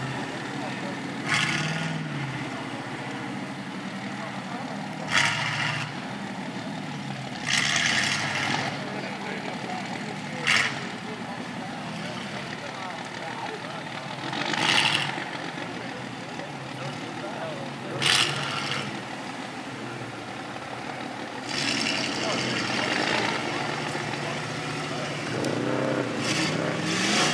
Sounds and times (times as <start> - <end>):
Speech: 0.0 - 1.3, 2.3 - 5.2, 8.5 - 19.0, 19.6 - 25.7
Outside, rural or natural: 0.0 - 27.3
Truck: 0.0 - 27.3
Tire squeal: 24.6 - 27.3.